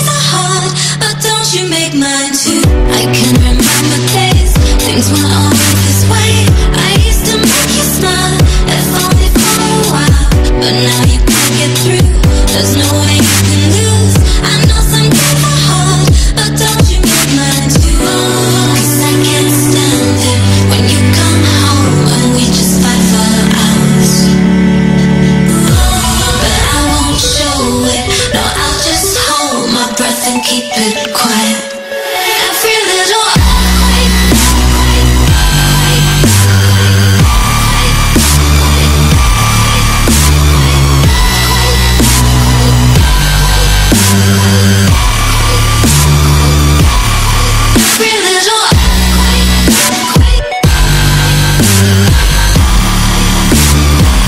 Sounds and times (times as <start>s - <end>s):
Dubstep: 0.0s - 54.2s.